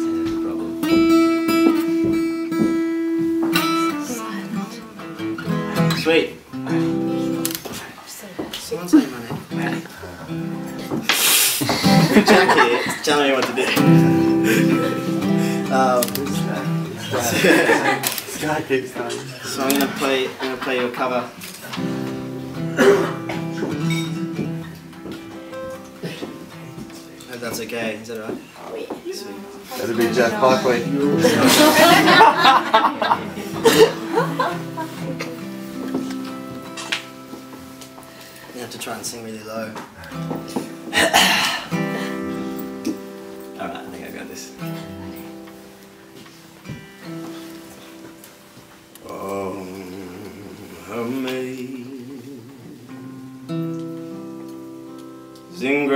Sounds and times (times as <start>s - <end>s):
Music: 0.0s - 7.8s, 9.3s - 18.3s, 19.0s - 28.0s, 29.5s - 55.9s.